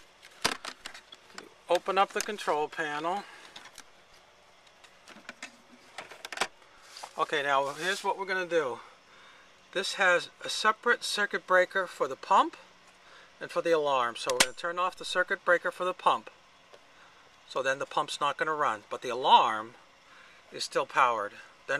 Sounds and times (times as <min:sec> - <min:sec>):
Speech: 0:01.4 - 0:03.3, 0:07.2 - 0:08.9, 0:09.7 - 0:12.7, 0:13.4 - 0:16.4, 0:17.5 - 0:19.8, 0:20.5 - 0:21.7.